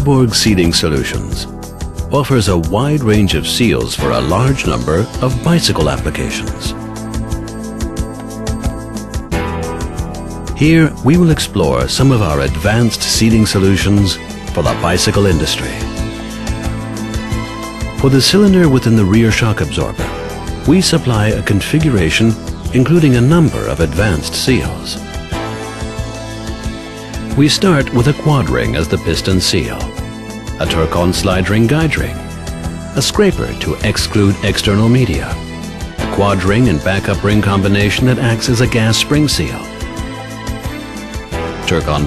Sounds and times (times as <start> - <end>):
Speech: 0.0 - 1.5, 2.1 - 6.8, 10.6 - 16.0, 18.0 - 20.0, 20.7 - 25.0, 27.4 - 30.0, 30.6 - 32.2, 33.0 - 35.4, 36.1 - 39.7, 41.7 - 42.0
Music: 0.0 - 42.0.